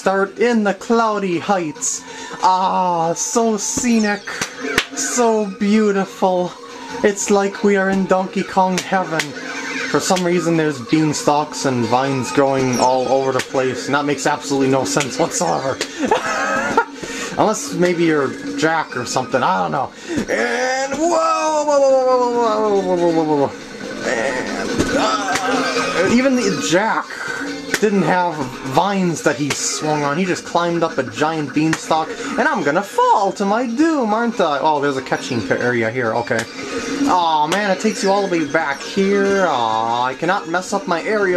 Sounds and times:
Speech: 0:00.0 - 0:04.4, 0:05.0 - 0:15.8, 0:17.4 - 0:27.2, 0:27.8 - 0:36.5, 0:37.1 - 0:41.3
Music: 0:00.0 - 0:41.3.

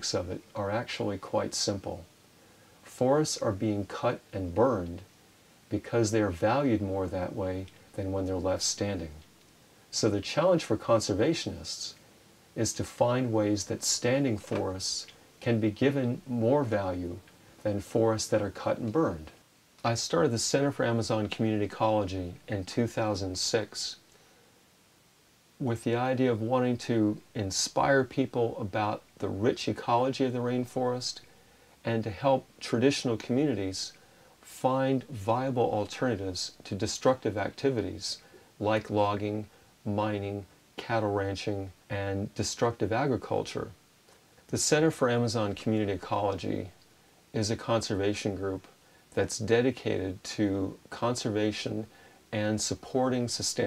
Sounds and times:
Speech: 0:00.0 - 0:02.1, 0:02.8 - 0:05.1, 0:05.7 - 0:09.3, 0:09.9 - 0:12.0, 0:12.6 - 0:24.1, 0:25.6 - 0:43.8, 0:44.5 - 0:53.6.

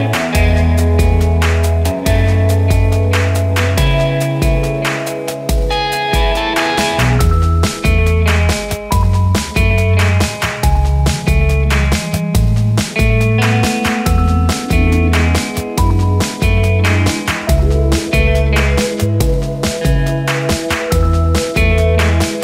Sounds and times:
Music: 0:00.0 - 0:22.4.

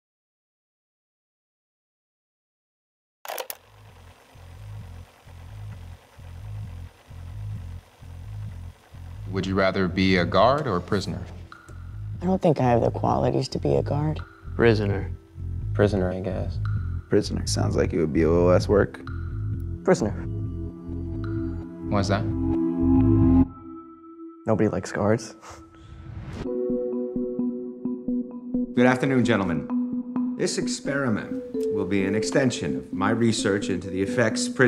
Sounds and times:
Speech: 0:09.3 - 0:11.4, 0:15.8 - 0:19.0, 0:24.5 - 0:25.4, 0:28.8 - 0:29.7, 0:30.4 - 0:34.6.

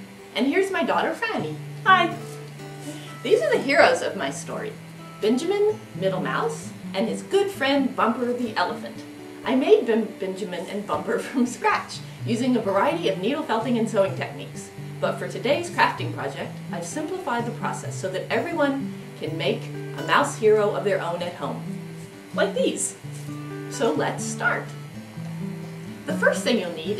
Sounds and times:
Music: 0:00.0 - 0:26.9
Speech: 0:00.4 - 0:02.3, 0:03.2 - 0:21.6, 0:22.4 - 0:23.0, 0:23.7 - 0:24.7, 0:26.1 - 0:26.9.

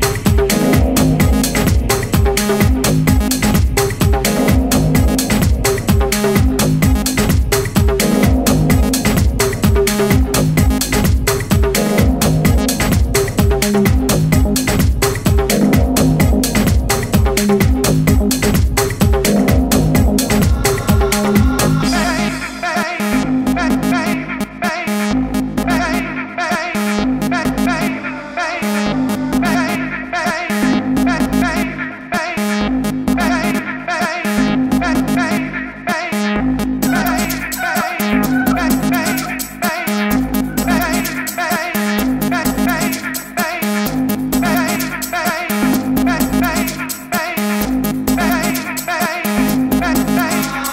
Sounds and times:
Electronica: 0:00.0 - 0:50.7.

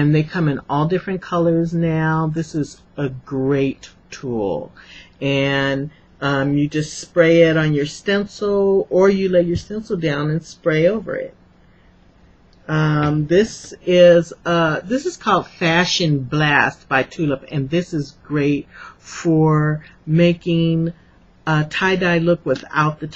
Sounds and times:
Speech: 0:00.0 - 0:11.4, 0:12.7 - 0:23.1.

